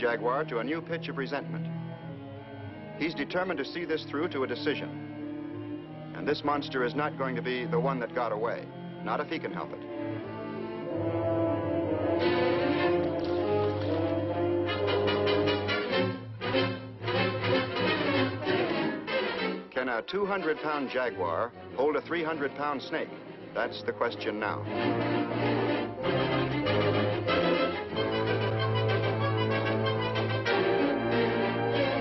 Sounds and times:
Music: 0.0s - 32.0s
Speech: 3.0s - 4.9s, 6.2s - 9.8s, 19.8s - 24.7s.

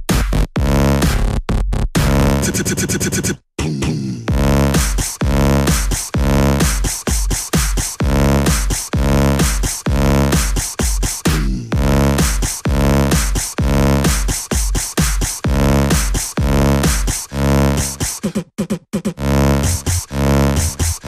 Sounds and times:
Electronic music: 0.0s - 18.2s, 19.2s - 21.0s
Beatboxing: 0.0s - 21.0s.

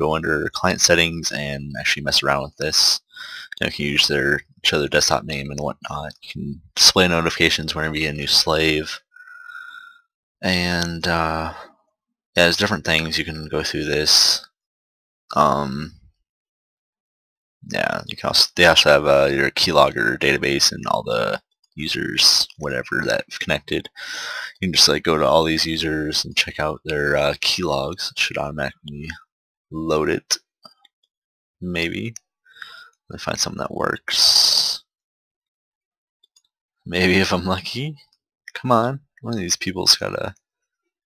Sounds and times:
Speech: 0.0s - 9.8s, 10.4s - 11.7s, 12.4s - 14.5s, 15.3s - 16.1s, 17.7s - 29.2s, 29.8s - 30.5s, 31.6s - 34.9s, 36.9s - 40.4s.

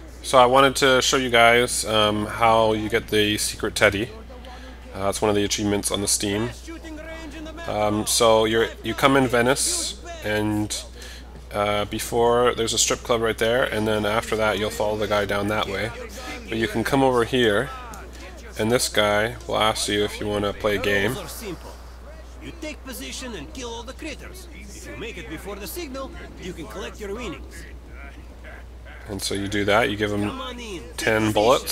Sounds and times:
Speech: 0.2s - 31.7s.

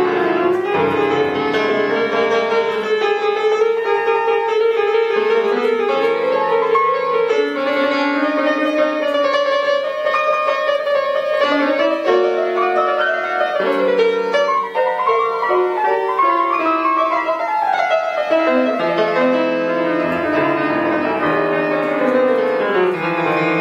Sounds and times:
Music: 0.0s - 23.6s.

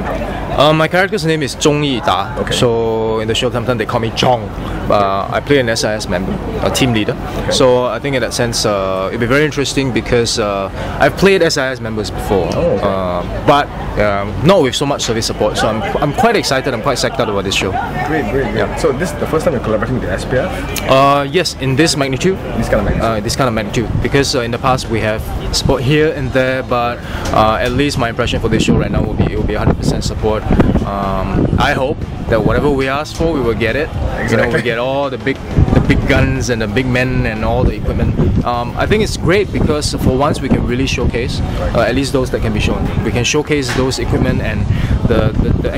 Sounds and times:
Speech: 0.0s - 45.7s.

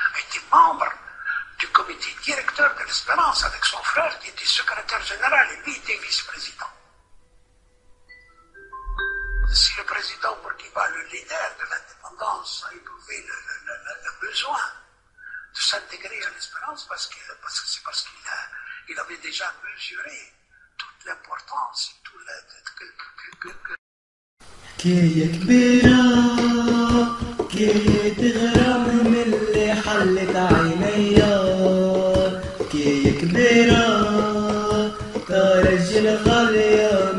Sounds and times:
Music: 7.0s - 10.9s, 25.2s - 37.1s.

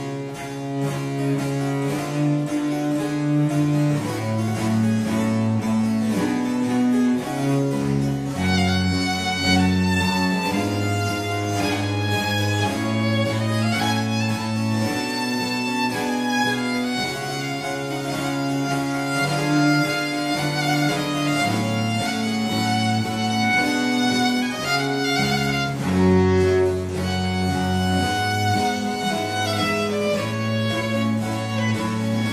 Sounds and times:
Violin, fiddle: 0.0s - 32.3s.

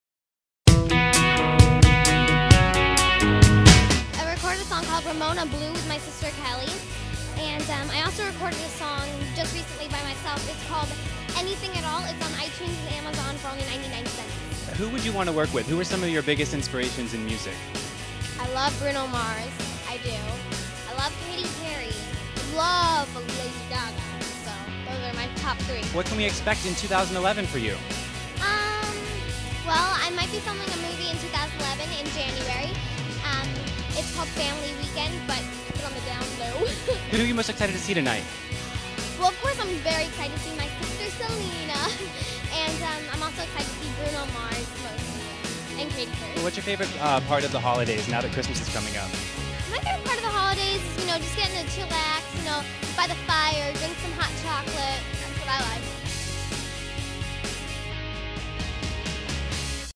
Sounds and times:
Music: 0.7s - 59.9s
Speech: 4.2s - 17.6s, 18.4s - 27.8s, 28.4s - 38.2s, 39.2s - 45.0s, 45.8s - 55.8s.

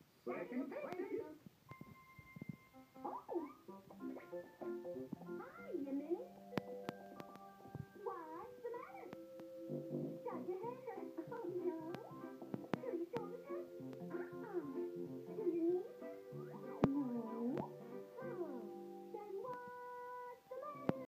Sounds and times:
Speech: 0.2s - 1.4s, 5.4s - 6.3s, 8.0s - 9.2s, 10.2s - 12.1s, 12.8s - 15.9s, 18.2s - 21.0s
Music: 0.4s - 21.1s.

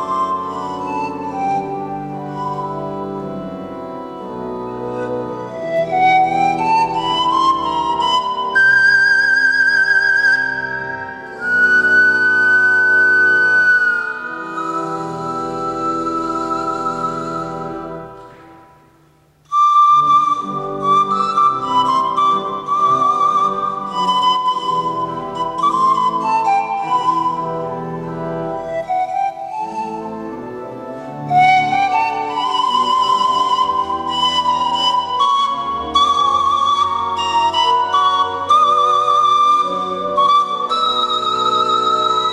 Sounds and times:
Classical music: 0.0s - 42.3s
Musical instrument: 0.0s - 42.3s.

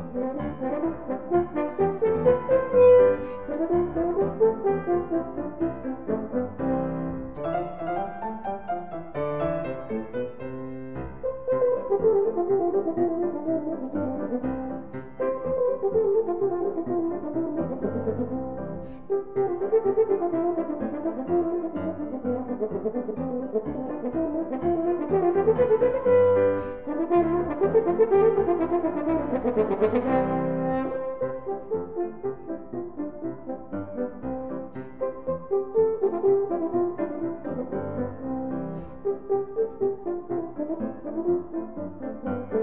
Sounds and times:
French horn: 0.0s - 42.6s.

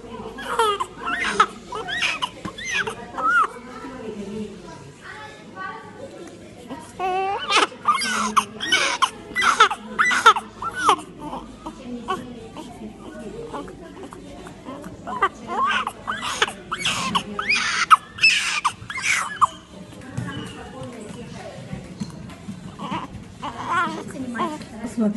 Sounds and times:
Speech: 0.0s - 25.1s.

